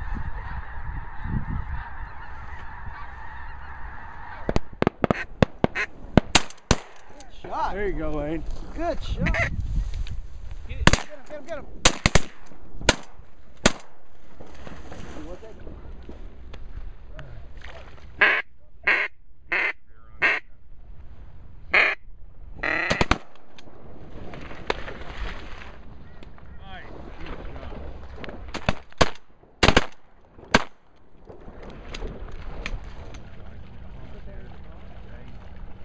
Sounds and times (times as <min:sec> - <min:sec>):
Speech: 0:33.8 - 0:35.4.